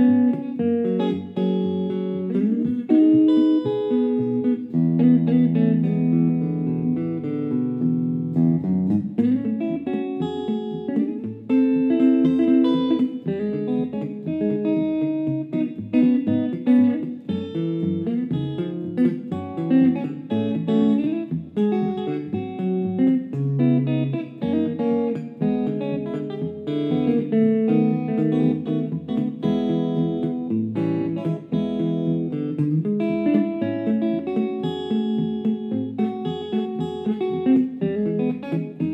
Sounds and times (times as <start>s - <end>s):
Bass guitar: 0.0s - 38.9s.